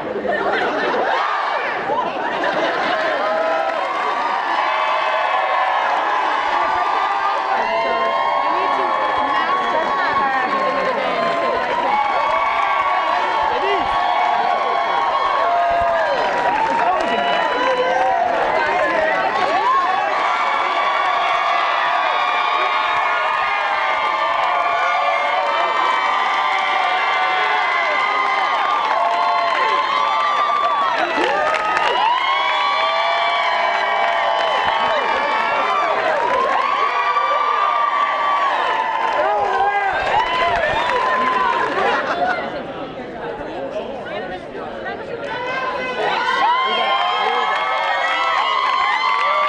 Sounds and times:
Speech: 0:06.2 - 0:12.2, 0:16.6 - 0:20.7, 0:39.2 - 0:48.3.

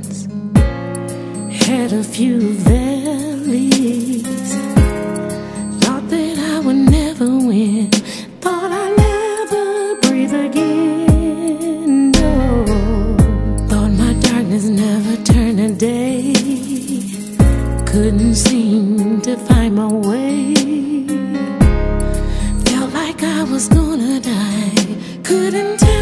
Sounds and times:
Music: 0:00.0 - 0:26.0.

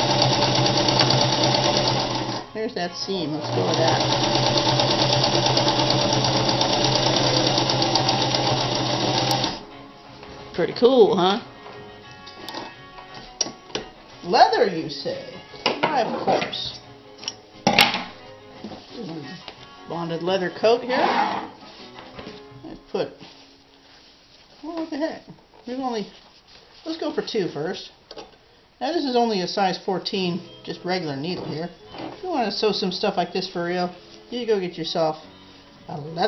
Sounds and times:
Music: 0:00.0 - 0:36.2
Speech: 0:02.6 - 0:04.1, 0:14.2 - 0:16.8, 0:18.9 - 0:21.2, 0:24.6 - 0:26.2, 0:26.8 - 0:27.9, 0:28.8 - 0:35.2, 0:35.9 - 0:36.2.

